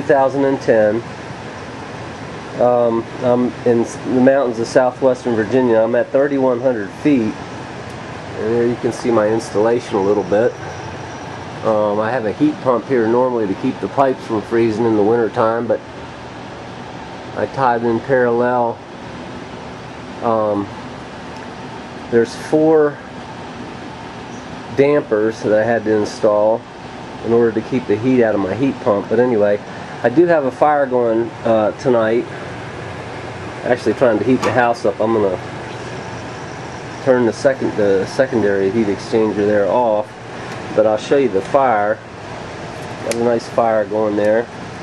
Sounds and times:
Speech: 0:00.0 - 0:01.1, 0:02.6 - 0:07.4, 0:08.4 - 0:10.6, 0:11.6 - 0:15.8, 0:17.4 - 0:18.8, 0:20.2 - 0:20.8, 0:22.1 - 0:23.1, 0:24.7 - 0:32.3, 0:33.6 - 0:35.4, 0:37.0 - 0:40.1, 0:40.8 - 0:42.0, 0:43.0 - 0:44.5.

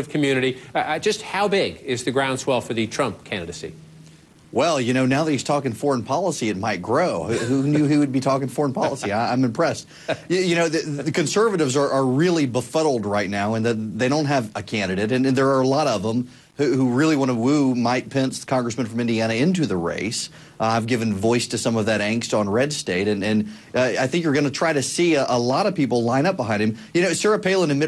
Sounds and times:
Speech: 0:04.6 - 0:27.8.

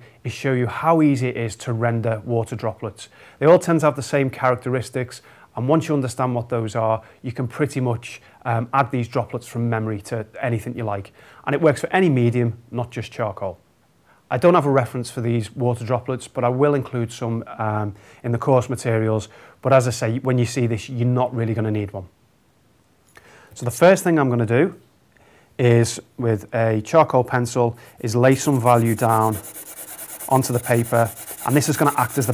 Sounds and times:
Speech: 0:00.2 - 0:13.6, 0:14.3 - 0:22.1, 0:23.6 - 0:24.8, 0:25.6 - 0:29.6, 0:30.2 - 0:32.3.

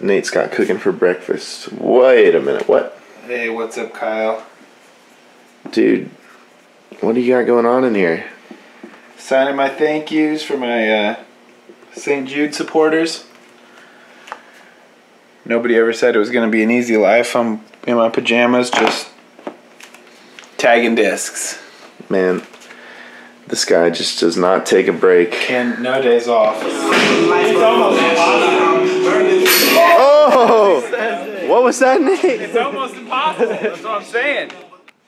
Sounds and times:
Speech: 0:00.0 - 0:04.5, 0:05.7 - 0:06.2, 0:07.0 - 0:08.4, 0:09.2 - 0:11.3, 0:11.9 - 0:13.3, 0:15.4 - 0:19.2, 0:20.6 - 0:22.5, 0:23.5 - 0:34.8.

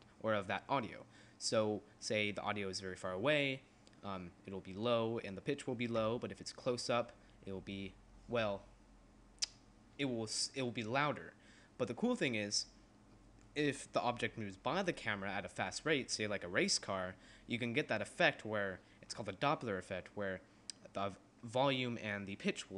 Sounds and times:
Speech: 0:00.2 - 0:08.7, 0:10.0 - 0:12.8, 0:13.6 - 0:22.7.

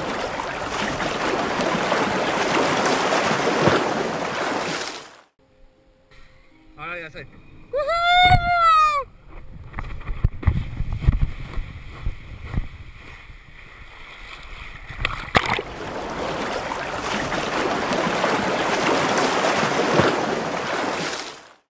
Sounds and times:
Water: 0:00.0 - 0:05.4, 0:06.9 - 0:21.7.

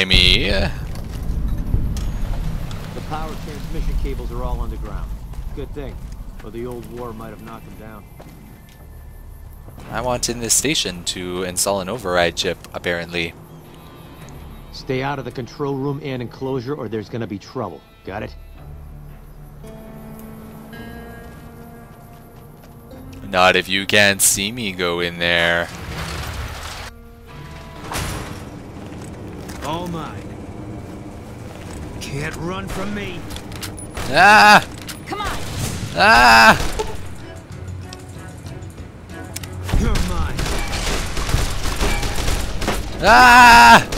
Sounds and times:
Music: 0:00.0 - 0:43.9.

